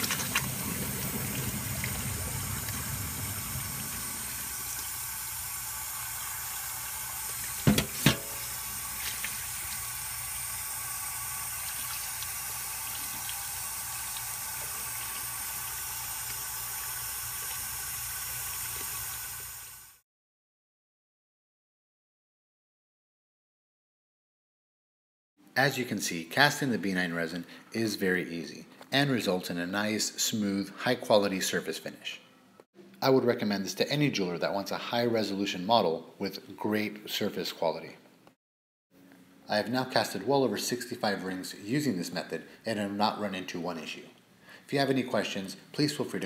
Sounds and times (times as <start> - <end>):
Sink (filling or washing): 0.0 - 20.0
Water: 0.0 - 20.0.